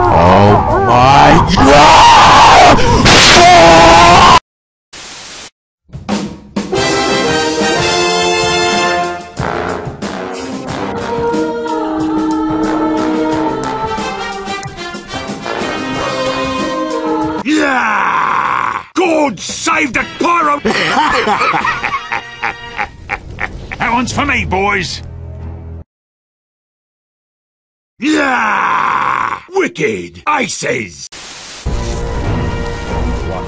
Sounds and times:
Speech: 0:00.1 - 0:01.8, 0:19.0 - 0:20.7, 0:23.8 - 0:25.0, 0:29.4 - 0:31.1
Music: 0:05.9 - 0:17.4, 0:19.7 - 0:23.0, 0:25.0 - 0:25.8, 0:31.7 - 0:33.4.

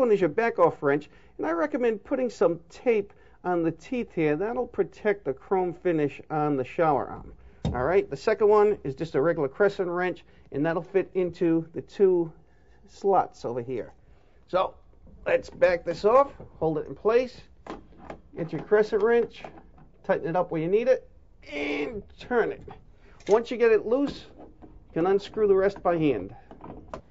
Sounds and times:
Speech: 0:00.0 - 0:17.5, 0:18.4 - 0:24.4, 0:25.0 - 0:26.4.

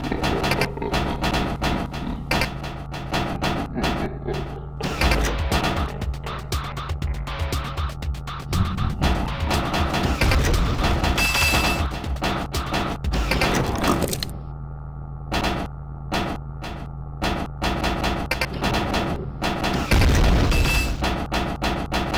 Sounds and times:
Music: 0:00.0 - 0:14.1.

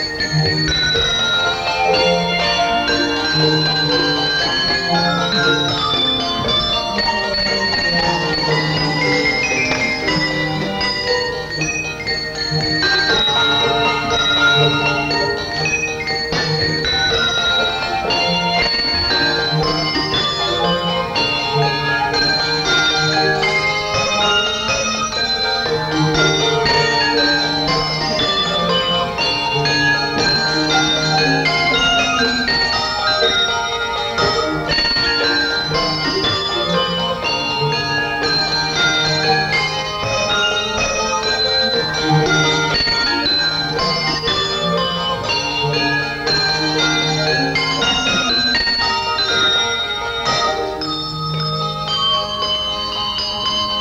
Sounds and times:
Orchestra: 0:00.0 - 0:53.8.

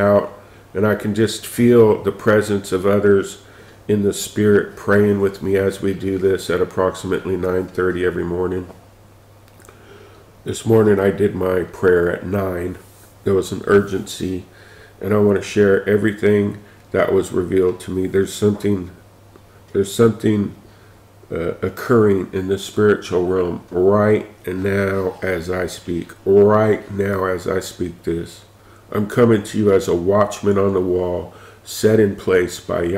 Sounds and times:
Speech: 0:00.0 - 0:08.8, 0:10.5 - 0:19.0, 0:19.7 - 0:20.6, 0:21.3 - 0:32.9.

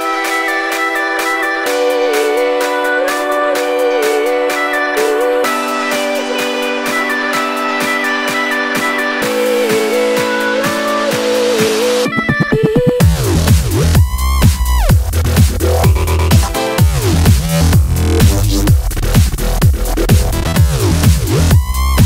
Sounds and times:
Dubstep: 0:01.2 - 0:22.0.

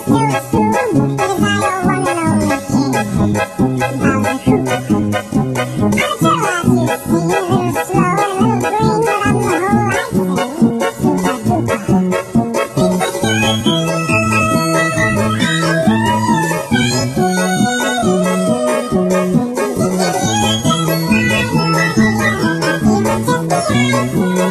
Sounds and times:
Music: 0:00.0 - 0:24.5.

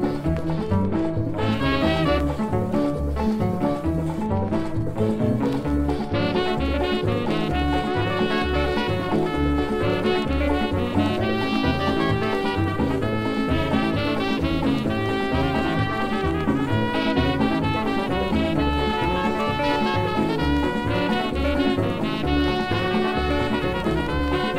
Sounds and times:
Musical instrument: 0:00.0 - 0:24.5.

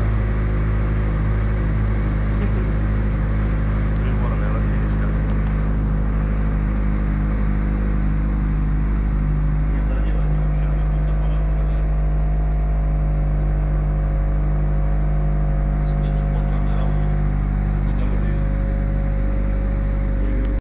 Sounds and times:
Engine: 0:00.0 - 0:20.6
Vehicle: 0:00.0 - 0:20.6
Speech: 0:04.0 - 0:05.6, 0:09.7 - 0:12.0, 0:15.8 - 0:17.2, 0:17.8 - 0:18.5, 0:20.2 - 0:20.6.

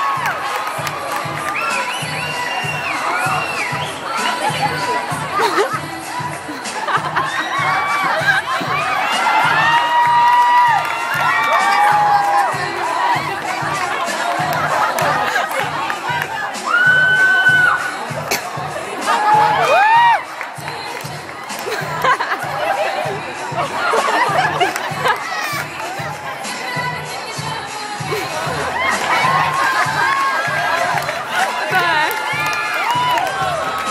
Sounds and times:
Inside, public space: 0:00.0 - 0:33.9
Music: 0:00.0 - 0:33.9
Singing: 0:00.0 - 0:33.9.

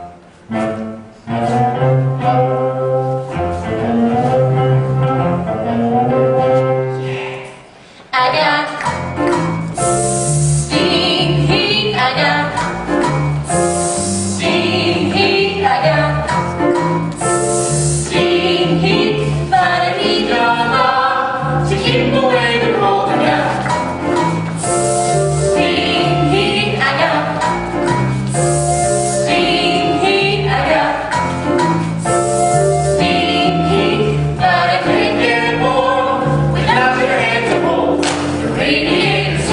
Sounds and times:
Music: 0:00.0 - 0:39.5
Hiss: 0:09.8 - 0:11.0, 0:13.5 - 0:14.7, 0:17.3 - 0:18.3, 0:24.6 - 0:25.5, 0:28.3 - 0:29.4, 0:32.0 - 0:33.0.

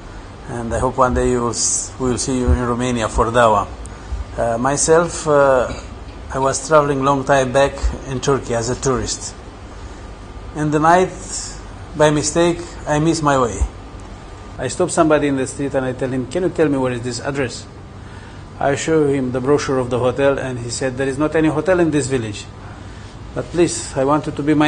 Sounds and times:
Speech: 0:00.5 - 0:03.8, 0:04.4 - 0:09.4, 0:10.6 - 0:13.8, 0:14.6 - 0:17.7, 0:18.6 - 0:22.6, 0:23.4 - 0:24.6.

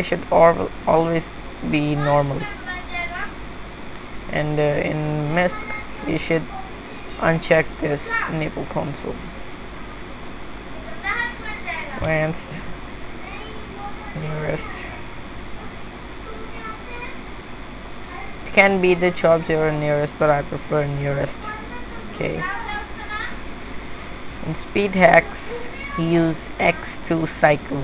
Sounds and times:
Inside, small room: 0:00.0 - 0:27.8.

